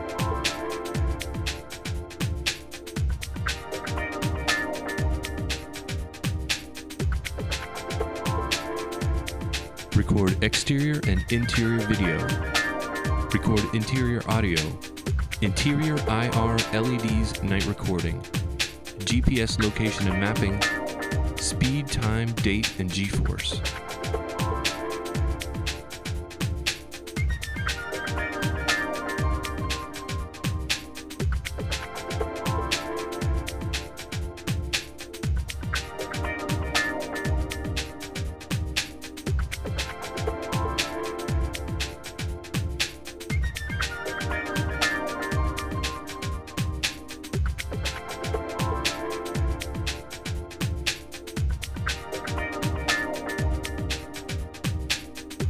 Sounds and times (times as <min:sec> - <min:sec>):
Music: 0:00.0 - 0:55.4.